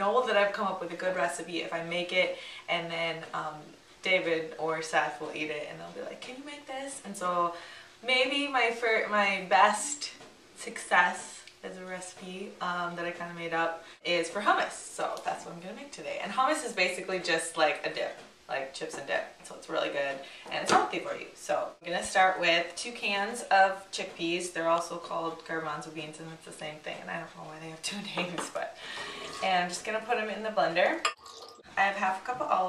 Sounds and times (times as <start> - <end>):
Speech: 0.0 - 31.1, 31.8 - 32.6.